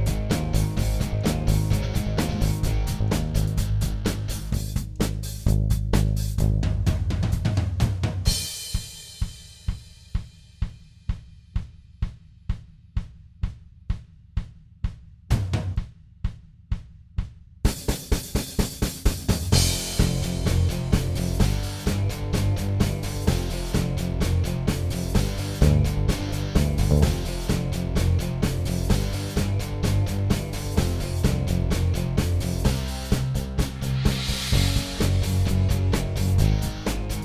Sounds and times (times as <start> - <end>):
Drum kit: 0.0 - 37.2
Snare drum: 4.1 - 23.9, 24.7 - 27.7, 32.6 - 37.2.